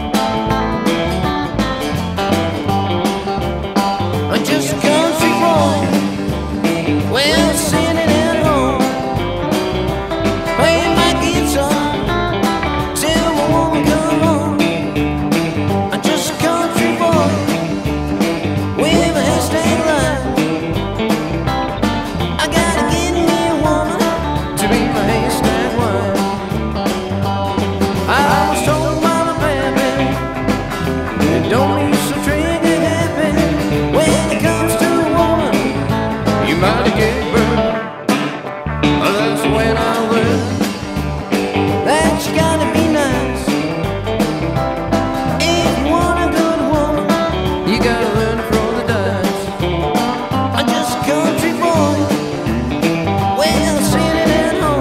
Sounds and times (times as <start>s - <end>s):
Acoustic guitar: 0.0s - 54.8s
Strum: 0.0s - 54.8s.